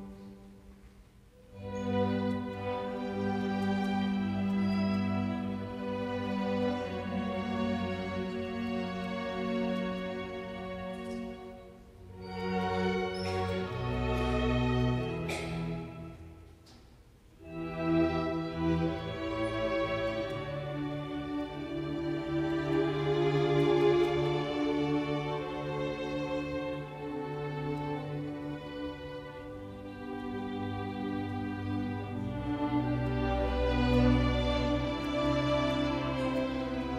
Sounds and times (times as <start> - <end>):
Violin, fiddle: 0.0 - 16.3, 17.4 - 36.9.